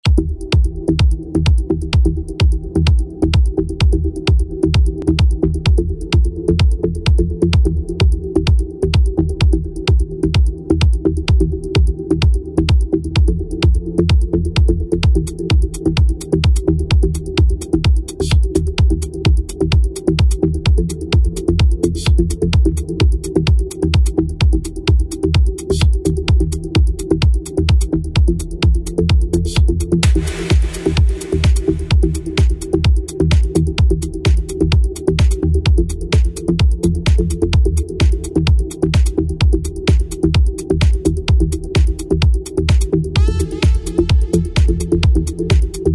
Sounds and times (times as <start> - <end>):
House music: 0.0 - 45.9
Rhythm and blues: 0.0 - 45.9
Exciting music: 30.0 - 34.6, 42.8 - 45.9.